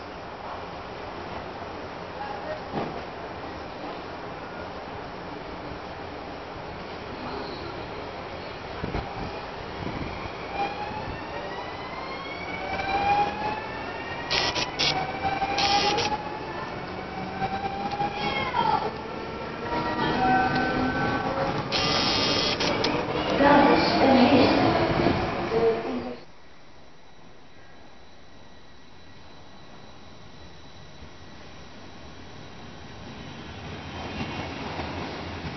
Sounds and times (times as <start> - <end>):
Speech: 18.2 - 19.0, 23.3 - 24.7.